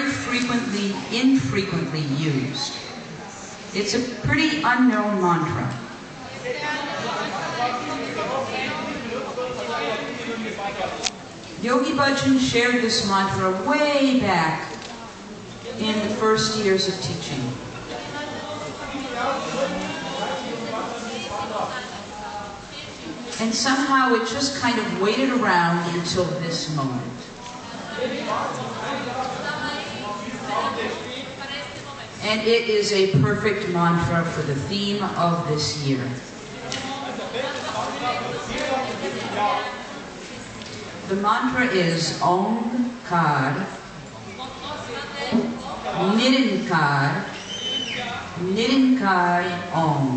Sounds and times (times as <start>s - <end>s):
Speech: 0.0s - 2.9s, 15.7s - 39.9s, 41.1s - 43.8s, 48.0s - 50.1s.